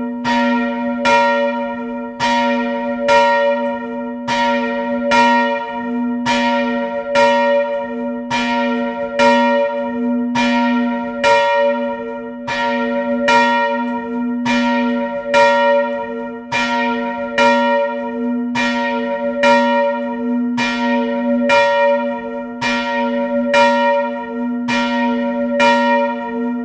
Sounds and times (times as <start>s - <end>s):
Church bell: 0.0s - 26.6s.